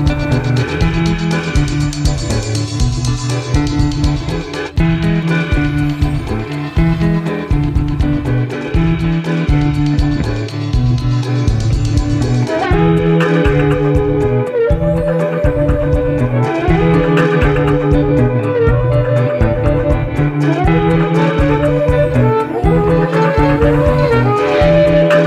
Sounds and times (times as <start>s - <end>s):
Theremin: 0.0s - 25.2s.